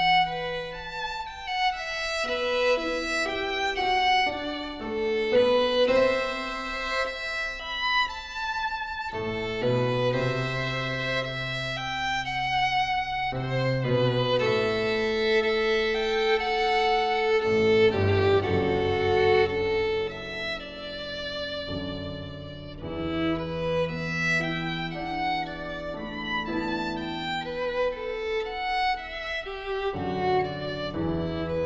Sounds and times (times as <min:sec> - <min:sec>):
Violin, fiddle: 0:00.0 - 0:31.6.